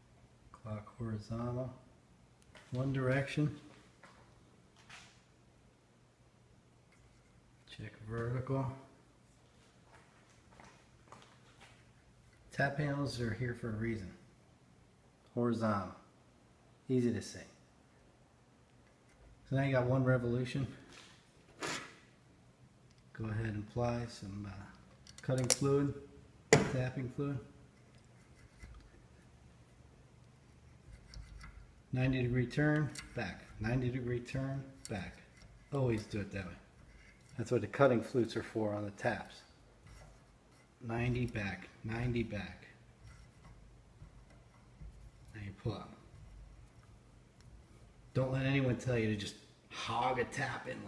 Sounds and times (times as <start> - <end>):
Speech: 0.6 - 1.9, 2.7 - 3.7, 7.7 - 8.9, 12.5 - 14.2, 15.3 - 16.1, 16.9 - 17.6, 19.5 - 20.9, 23.2 - 26.0, 26.6 - 27.5, 31.9 - 36.7, 37.4 - 39.6, 40.8 - 42.8, 45.3 - 46.1, 48.2 - 50.8.